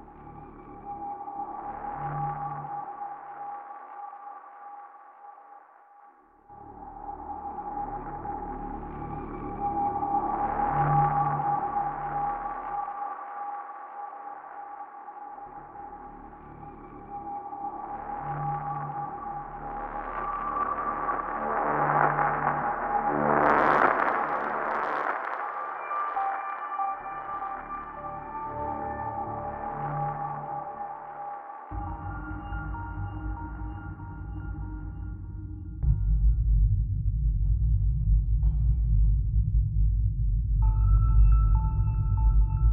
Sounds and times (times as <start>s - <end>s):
Music: 0.0s - 42.7s.